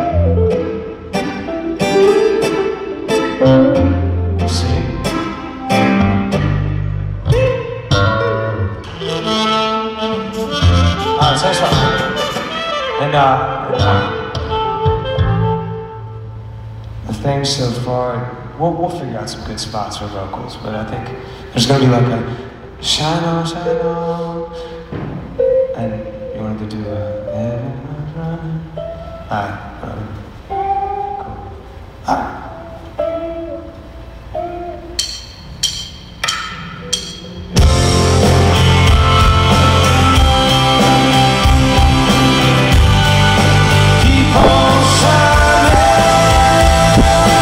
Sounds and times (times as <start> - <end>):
Music: 0.0 - 17.1, 22.5 - 47.4
Speech: 4.4 - 5.0, 11.2 - 12.0, 13.0 - 14.2, 17.1 - 23.6, 32.1 - 32.5.